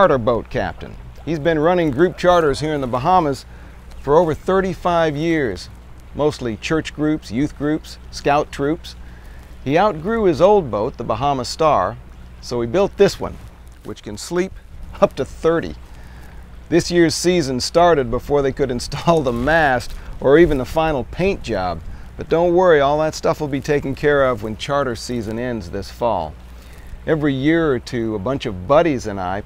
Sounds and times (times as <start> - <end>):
Speech: 0.0 - 9.0, 9.6 - 15.8, 16.7 - 26.4, 27.1 - 29.4.